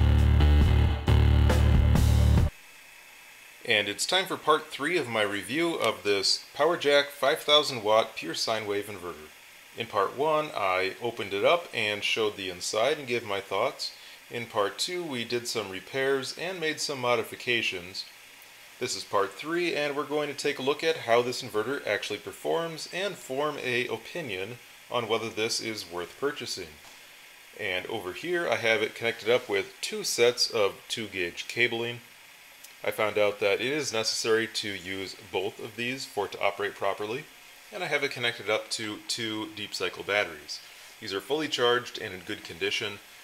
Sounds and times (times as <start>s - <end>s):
Speech: 3.6s - 18.1s, 18.8s - 26.8s, 27.6s - 32.1s, 32.8s - 43.0s.